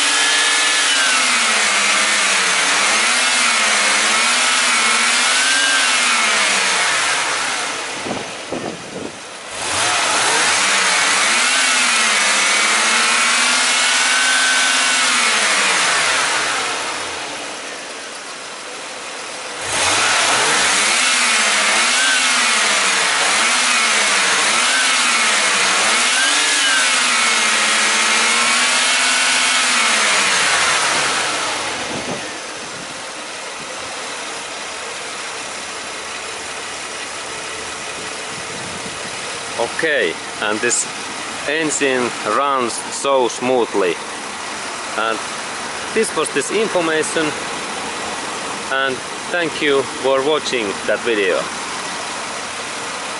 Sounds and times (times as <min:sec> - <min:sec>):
Engine: 0:00.0 - 0:53.1
Vehicle: 0:00.0 - 0:53.1.